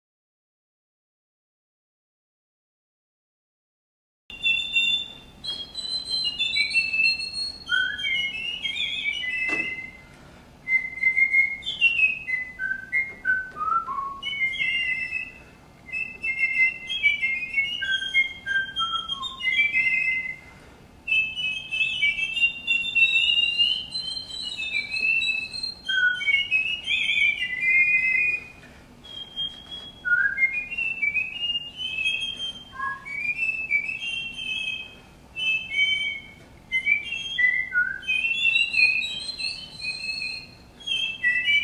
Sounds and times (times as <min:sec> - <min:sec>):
Whistling: 0:04.3 - 0:41.6.